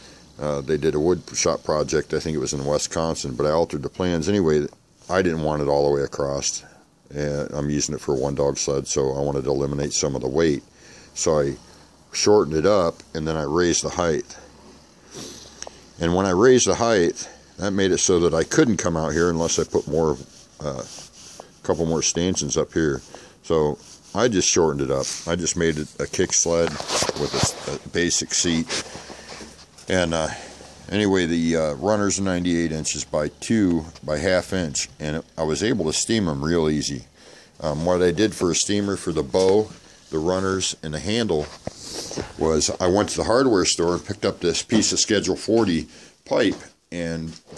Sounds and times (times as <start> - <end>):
Speech: 0.4 - 14.5, 16.0 - 28.9, 29.8 - 41.6, 42.2 - 47.5.